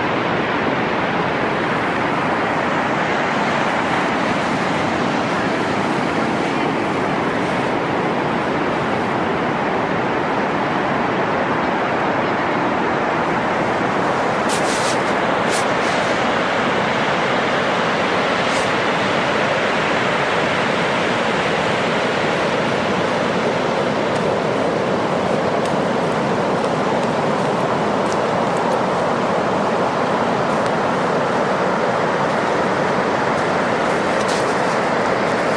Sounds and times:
Waves, surf: 0:00.0 - 0:35.5.

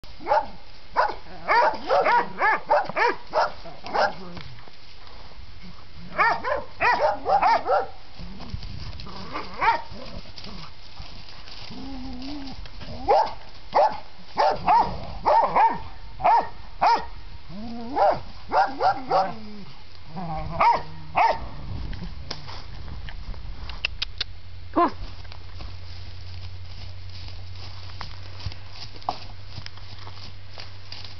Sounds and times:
Bark: 0:00.2 - 0:04.2, 0:06.2 - 0:08.0, 0:09.6 - 0:09.9, 0:13.1 - 0:17.1, 0:18.0 - 0:19.4, 0:20.6 - 0:21.4.

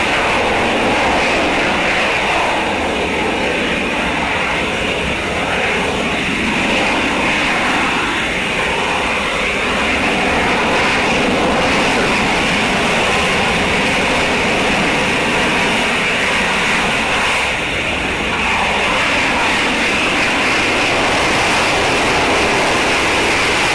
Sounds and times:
Aircraft: 0:00.0 - 0:23.7
Engine: 0:00.0 - 0:23.7.

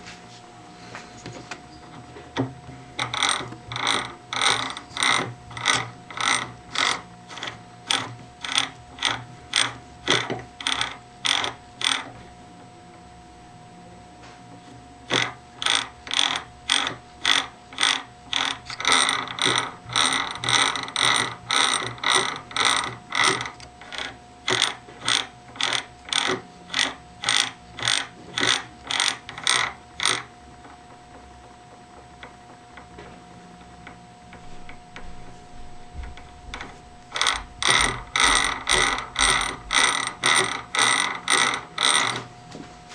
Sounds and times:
Gears: 0:01.8 - 0:12.3, 0:15.0 - 0:42.3
Ratchet, pawl: 0:01.9 - 0:12.3, 0:15.0 - 0:42.4.

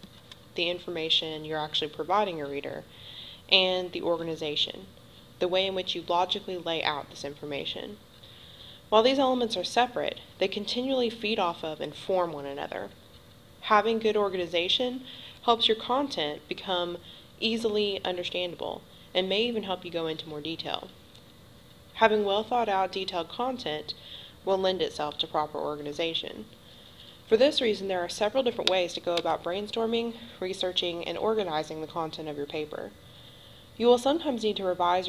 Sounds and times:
Speech: 0:00.6 - 0:02.8, 0:03.5 - 0:08.0, 0:08.9 - 0:13.0, 0:13.6 - 0:21.0, 0:22.0 - 0:26.5, 0:27.3 - 0:33.0, 0:33.8 - 0:35.0.

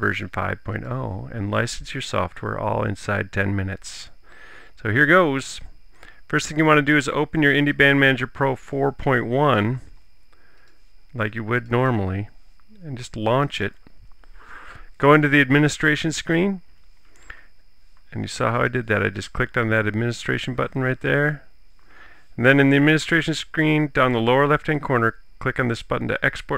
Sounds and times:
Speech: 0:00.0 - 0:04.2, 0:04.8 - 0:05.7, 0:06.3 - 0:09.9, 0:11.2 - 0:13.8, 0:15.0 - 0:16.6, 0:18.1 - 0:21.5, 0:22.4 - 0:26.5.

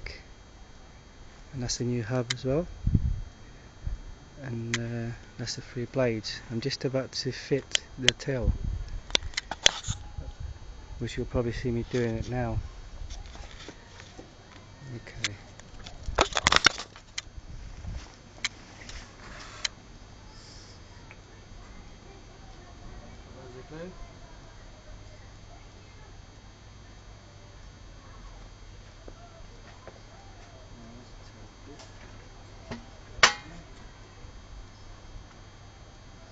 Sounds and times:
Speech: 0:10.1 - 0:12.7.

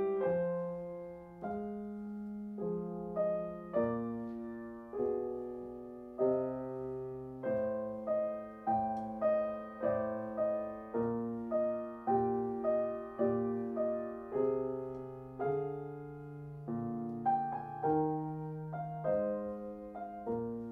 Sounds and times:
Classical music: 0:00.0 - 0:20.7
Piano: 0:00.0 - 0:20.7.

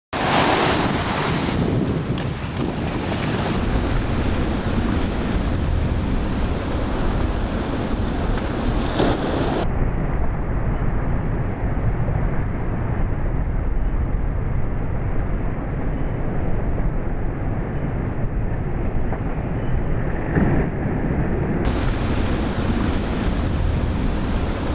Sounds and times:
Waves, surf: 0:00.1 - 0:09.7, 0:21.7 - 0:24.7
Wind noise (microphone): 0:00.2 - 0:24.7.

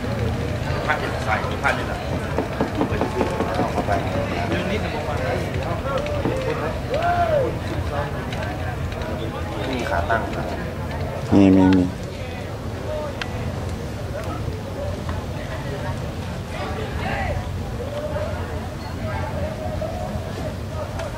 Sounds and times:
Speech: 0:00.0 - 0:21.1.

